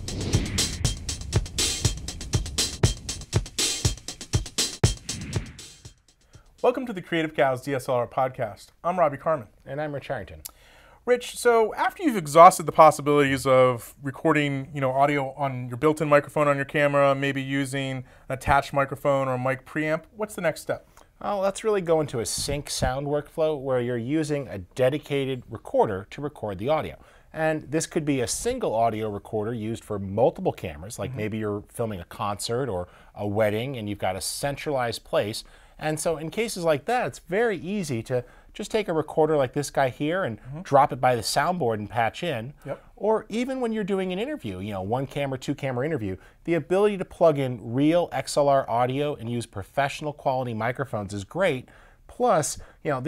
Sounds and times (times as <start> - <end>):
Speech: 6.6 - 53.0.